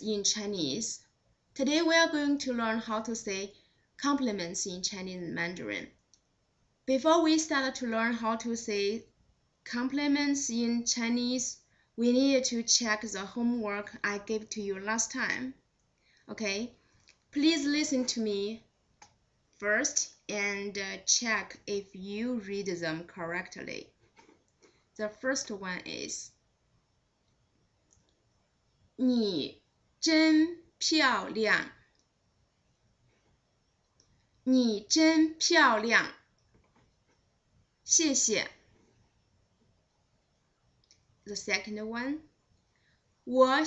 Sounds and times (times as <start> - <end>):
Speech: 0.0 - 6.0, 6.9 - 9.1, 9.7 - 15.6, 16.3 - 18.7, 19.6 - 23.9, 25.0 - 26.4, 29.0 - 31.8, 34.5 - 36.2, 37.9 - 38.6, 41.3 - 42.3, 43.3 - 43.6
Inside, small room: 0.0 - 43.6.